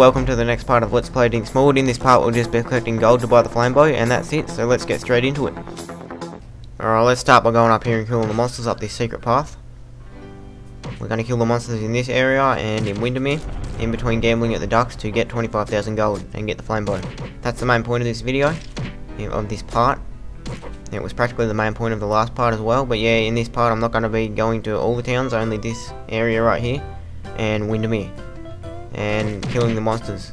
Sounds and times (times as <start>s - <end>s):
Speech: 0.0s - 5.6s, 6.8s - 9.6s, 11.0s - 18.6s, 19.2s - 20.0s, 20.9s - 26.8s, 27.4s - 28.1s, 29.0s - 30.3s
Music: 0.0s - 6.5s, 9.9s - 11.6s, 12.5s - 30.3s.